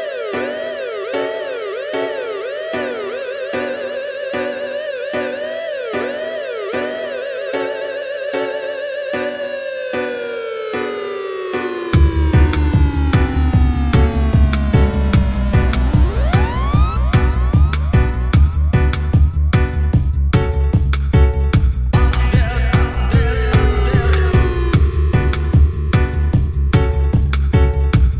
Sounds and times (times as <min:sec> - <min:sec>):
Music: 0:00.0 - 0:28.2.